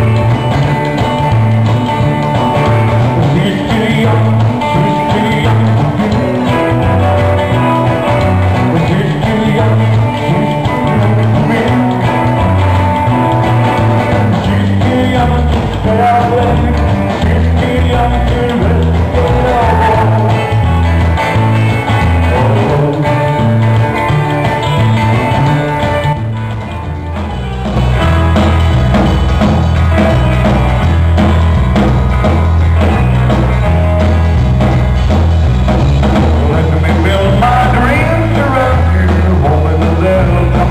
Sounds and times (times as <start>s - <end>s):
Guitar: 0.0s - 40.7s.